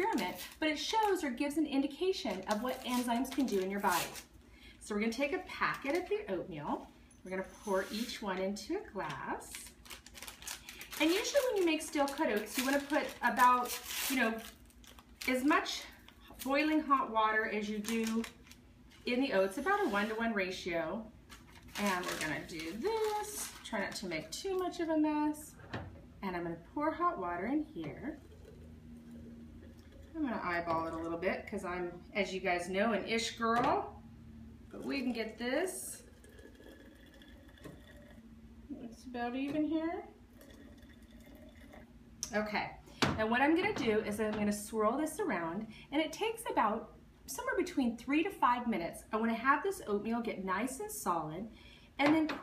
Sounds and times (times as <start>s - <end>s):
Speech: 0.0s - 4.1s, 4.9s - 9.7s, 11.0s - 14.4s, 21.8s - 25.6s, 26.2s - 28.2s, 30.2s - 33.9s, 34.8s - 36.1s, 38.7s - 40.1s, 42.3s - 52.4s.